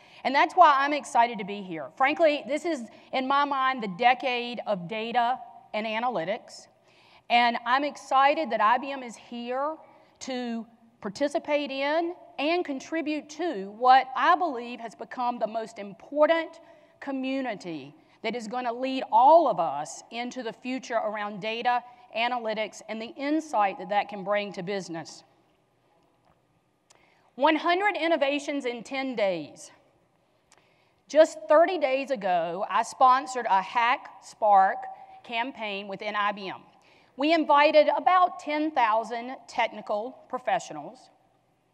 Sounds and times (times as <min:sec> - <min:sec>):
Speech: 0:00.2 - 0:06.7, 0:07.3 - 0:25.3, 0:27.4 - 0:29.8, 0:31.1 - 0:41.1.